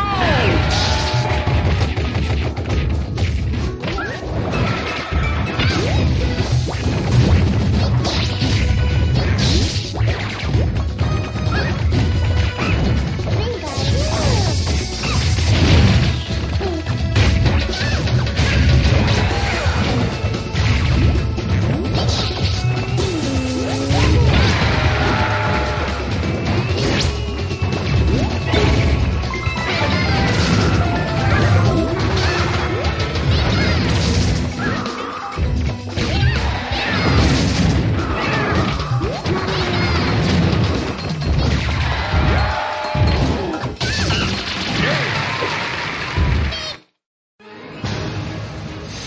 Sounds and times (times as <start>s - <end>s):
Music: 0.0s - 46.7s, 47.4s - 49.0s.